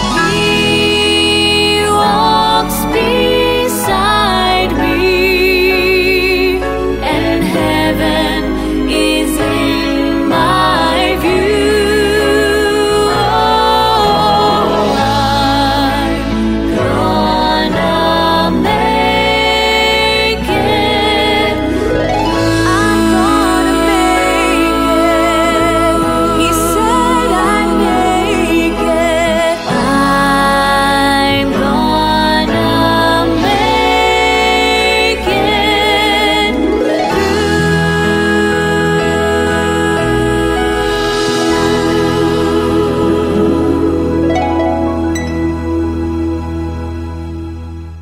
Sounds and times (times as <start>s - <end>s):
Music: 0.0s - 48.0s.